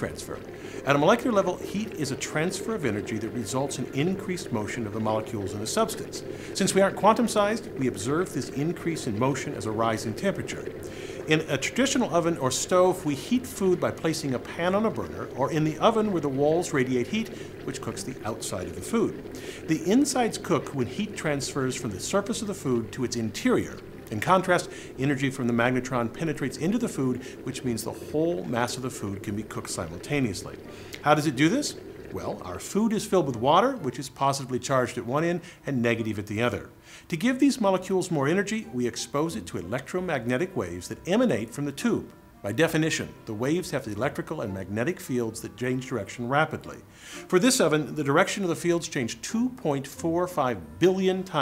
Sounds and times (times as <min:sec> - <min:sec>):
Speech: 0:00.0 - 0:51.4.